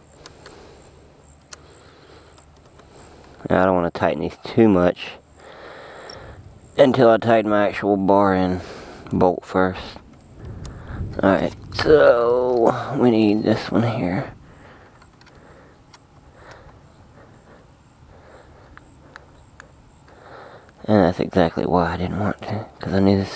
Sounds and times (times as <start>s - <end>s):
Speech: 3.4s - 5.2s, 6.8s - 10.0s, 11.2s - 14.3s, 20.8s - 23.3s.